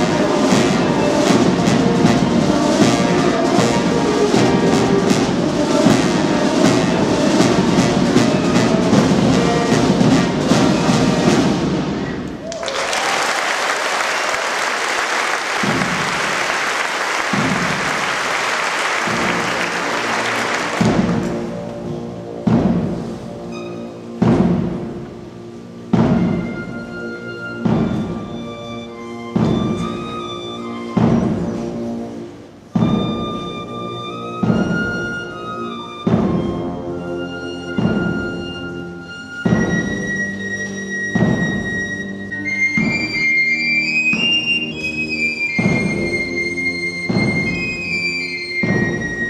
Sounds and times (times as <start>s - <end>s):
Timpani: 0.0s - 49.3s.